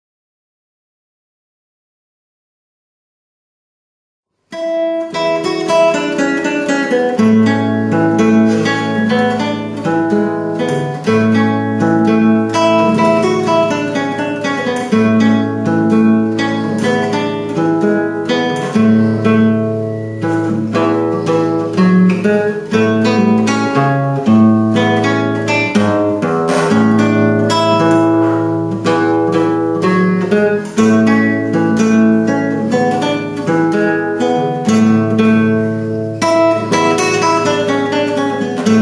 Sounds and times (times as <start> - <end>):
Guitar: 4.5 - 38.8.